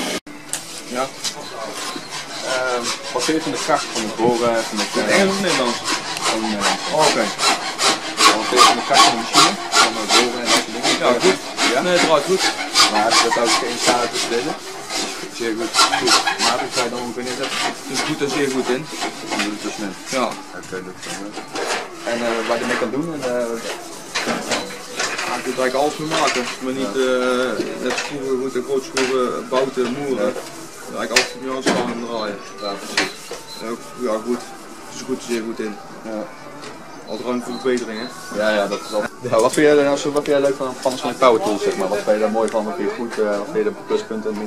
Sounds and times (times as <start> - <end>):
Male speech, man speaking: 2.4 - 7.4, 8.2 - 14.6, 15.4 - 21.4, 22.0 - 23.8, 25.2 - 36.3, 37.1 - 44.4.